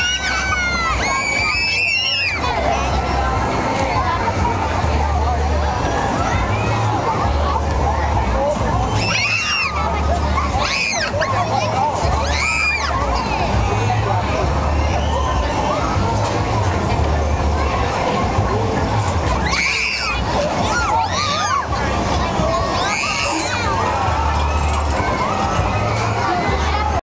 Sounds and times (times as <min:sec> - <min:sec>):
Speech: 0:00.0 - 0:27.0.